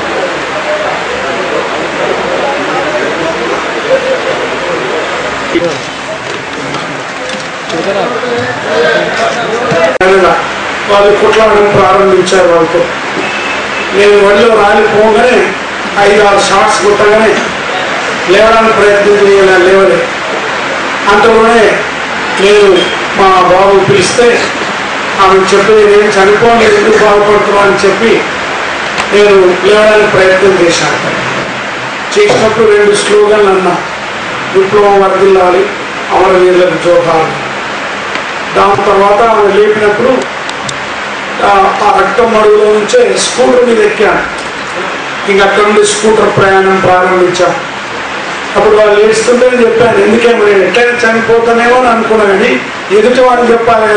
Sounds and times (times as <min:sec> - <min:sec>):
Male speech, man speaking: 0:00.6 - 0:05.8, 0:07.7 - 0:12.9, 0:13.9 - 0:20.1, 0:21.1 - 0:24.6, 0:25.2 - 0:28.3, 0:29.1 - 0:31.1, 0:32.2 - 0:33.9, 0:34.5 - 0:37.4, 0:38.6 - 0:40.3, 0:41.4 - 0:44.3, 0:45.3 - 0:47.7, 0:48.6 - 0:53.9
Narration, monologue: 0:08.4 - 0:53.9.